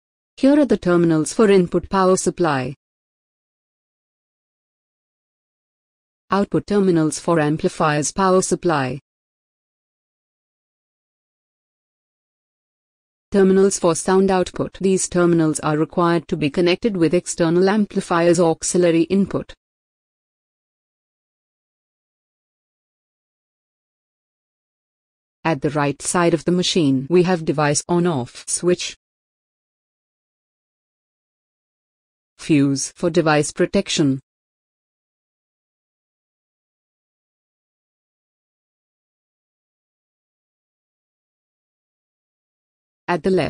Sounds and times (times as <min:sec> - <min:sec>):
Speech: 0:00.4 - 0:02.8, 0:06.3 - 0:09.0, 0:13.4 - 0:19.6, 0:25.5 - 0:29.0, 0:32.4 - 0:34.3, 0:43.1 - 0:43.5.